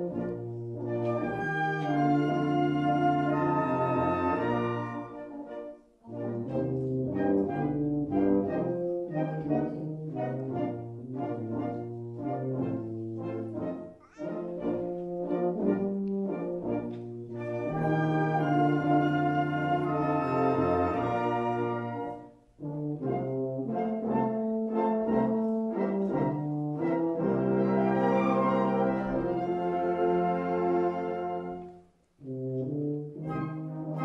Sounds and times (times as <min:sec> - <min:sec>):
Trombone: 0:00.0 - 0:34.0.